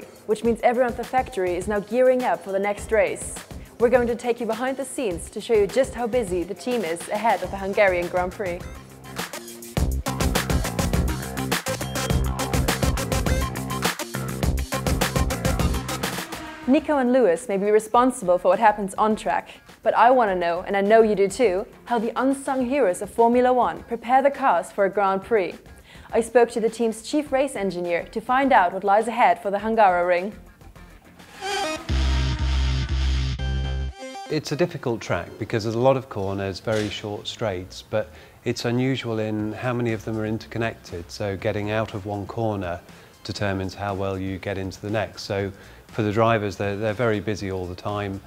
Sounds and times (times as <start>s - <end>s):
Music: 0.0s - 48.2s
Speech: 0.3s - 8.6s, 16.7s - 30.4s, 34.3s - 48.2s.